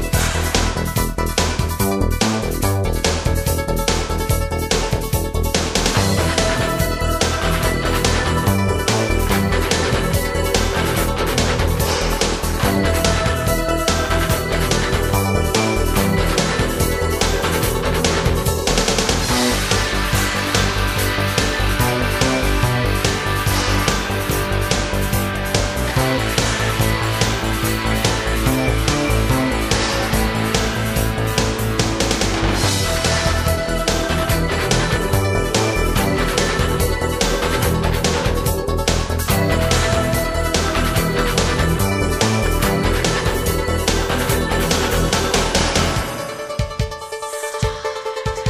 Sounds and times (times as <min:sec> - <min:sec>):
Music: 0:00.0 - 0:48.4.